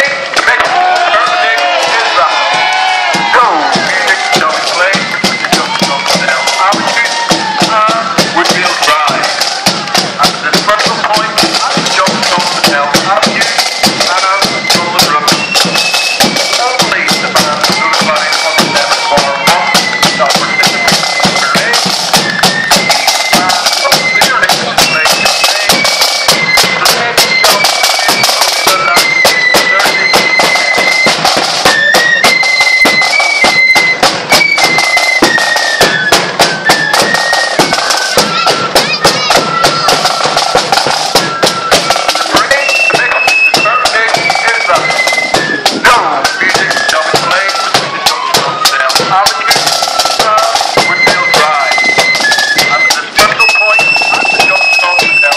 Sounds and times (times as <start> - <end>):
Speech: 0.0 - 2.5, 3.2 - 9.4, 10.2 - 15.4, 16.3 - 21.9, 23.3 - 25.9, 26.7 - 30.4, 38.2 - 40.0, 42.0 - 44.9, 45.8 - 51.8, 52.6 - 55.3
Music: 0.0 - 55.3.